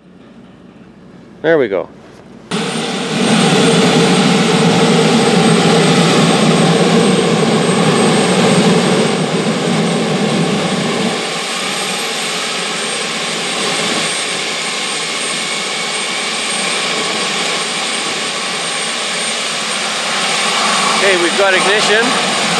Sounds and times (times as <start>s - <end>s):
Jet engine: 2.5s - 22.5s.